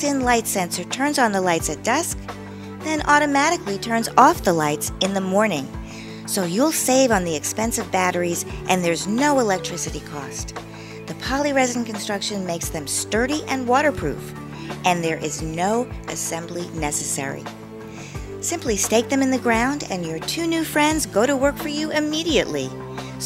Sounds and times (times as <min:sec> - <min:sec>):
Speech: 0:00.0 - 0:02.2, 0:02.8 - 0:05.7, 0:06.3 - 0:10.5, 0:11.1 - 0:17.5, 0:18.4 - 0:23.2
Music: 0:00.0 - 0:23.2.